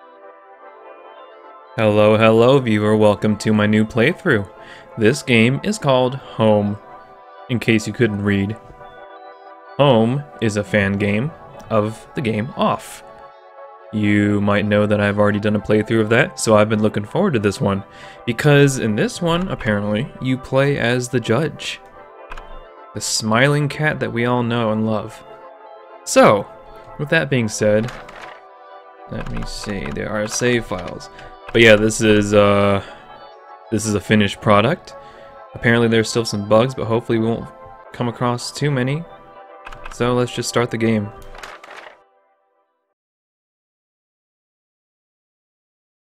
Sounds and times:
Music: 0.0s - 43.0s
Speech: 1.8s - 6.8s, 7.5s - 8.6s, 9.8s - 13.0s, 14.0s - 21.8s, 23.0s - 25.2s, 26.1s - 28.1s, 29.1s - 32.9s, 33.8s - 35.0s, 35.6s - 39.1s, 40.0s - 41.2s.

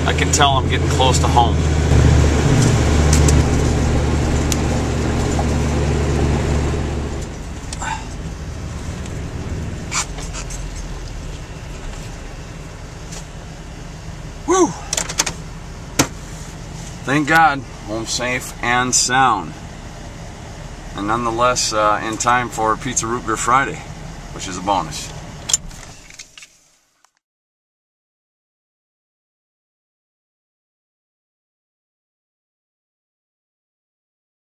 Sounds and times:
Speech: 0.0s - 1.6s, 14.5s - 14.9s, 17.1s - 19.6s, 21.0s - 25.2s
Vehicle: 0.0s - 27.2s.

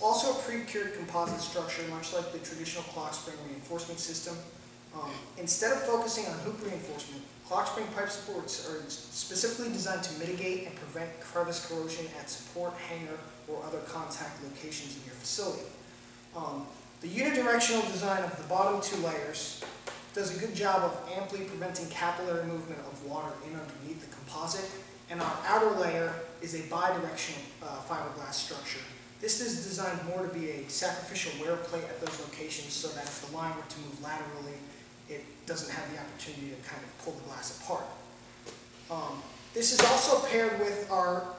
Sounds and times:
Speech: 0.0s - 15.8s, 16.4s - 19.6s, 20.2s - 38.0s, 38.9s - 41.3s.

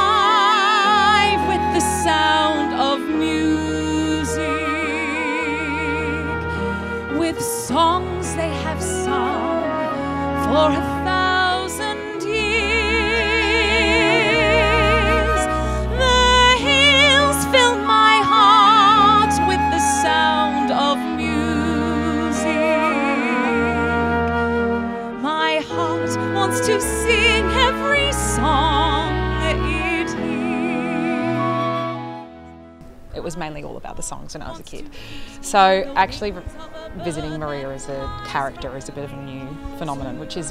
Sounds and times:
Music: 0.0s - 40.5s
Speech: 33.1s - 40.5s.

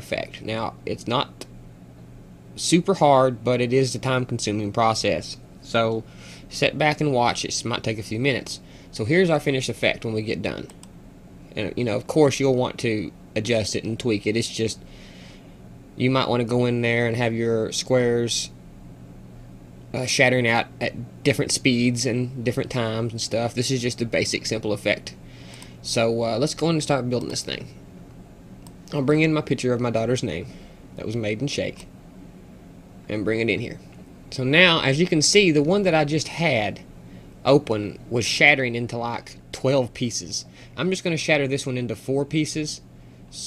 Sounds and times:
Speech: 0.0s - 1.5s, 2.6s - 10.8s, 11.5s - 14.8s, 16.0s - 18.6s, 19.9s - 25.2s, 25.8s - 27.8s, 28.9s - 31.9s, 33.1s - 43.4s.

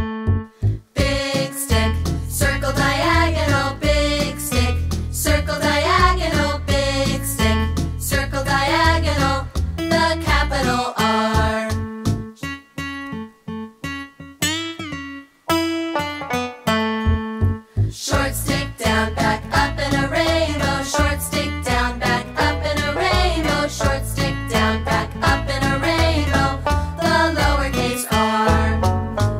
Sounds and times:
Music: 0.0s - 29.3s.

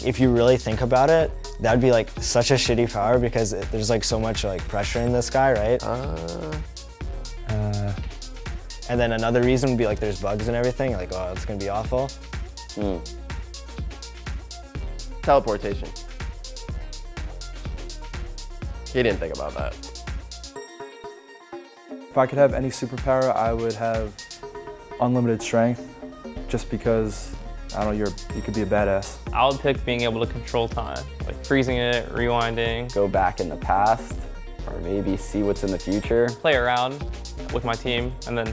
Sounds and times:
Speech: 0.0s - 6.6s, 8.9s - 12.1s, 12.8s - 13.0s, 15.3s - 15.9s, 18.9s - 19.8s, 22.2s - 24.1s, 25.0s - 25.8s, 26.5s - 38.5s
Music: 0.0s - 38.5s.

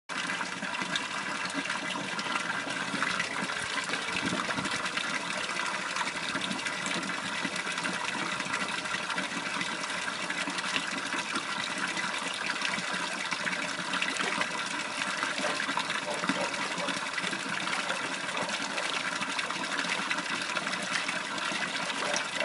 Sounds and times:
Trickle, dribble: 0.1s - 22.4s
Water: 0.1s - 22.4s.

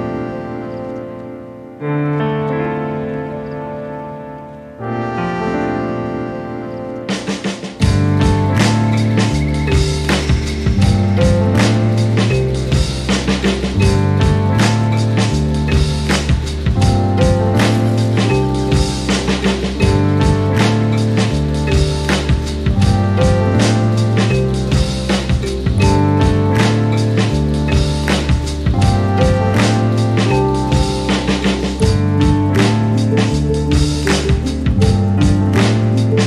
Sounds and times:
Music: 0.0s - 36.2s.

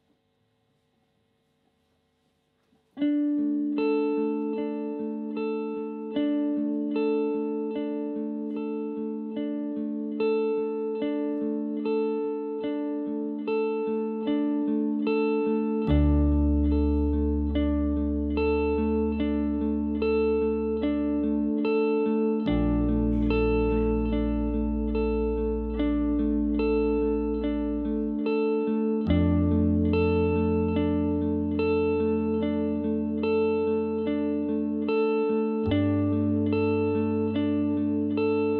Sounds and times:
Music: 1.8s - 38.6s.

